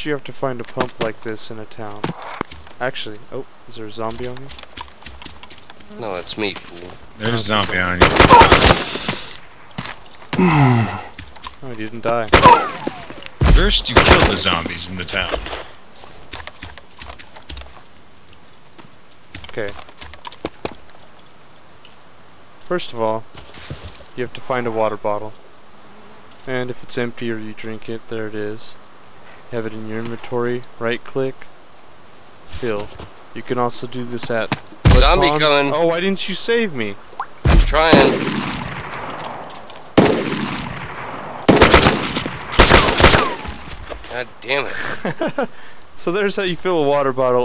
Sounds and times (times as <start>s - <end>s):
Speech: 0.0s - 2.1s, 2.8s - 4.5s, 5.9s - 8.0s, 11.6s - 12.3s, 13.4s - 15.5s, 19.5s - 19.8s, 22.7s - 23.2s, 24.2s - 25.3s, 26.5s - 28.8s, 29.5s - 31.4s, 32.6s - 37.0s, 37.6s - 38.2s, 46.0s - 47.4s.